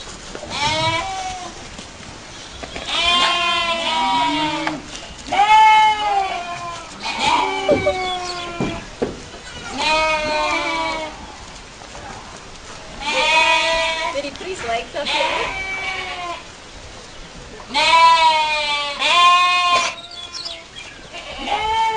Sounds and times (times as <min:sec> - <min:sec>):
Livestock, farm animals, working animals: 0:00.0 - 0:21.9.